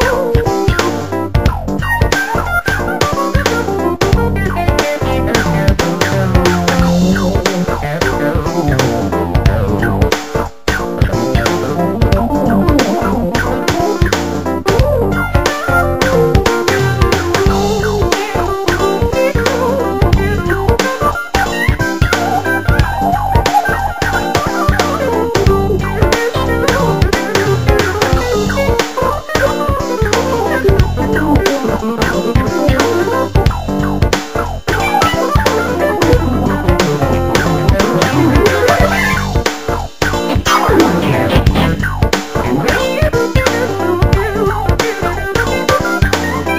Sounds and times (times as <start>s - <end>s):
Synthesizer: 0.0s - 46.5s.